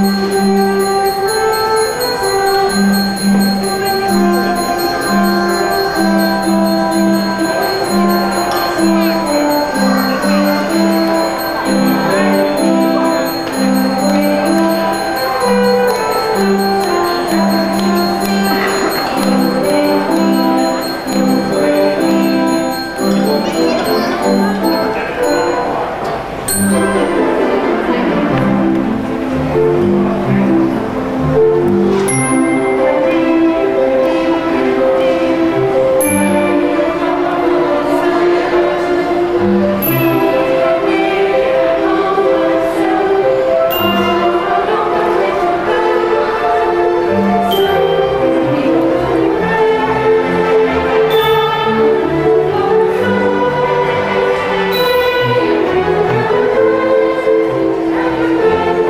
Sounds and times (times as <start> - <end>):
Tender music: 0.0 - 58.9.